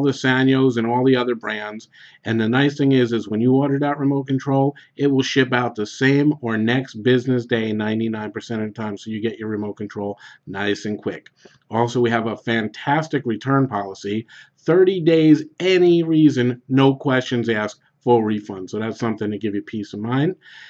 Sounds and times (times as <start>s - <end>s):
Speech: 0.0s - 20.6s.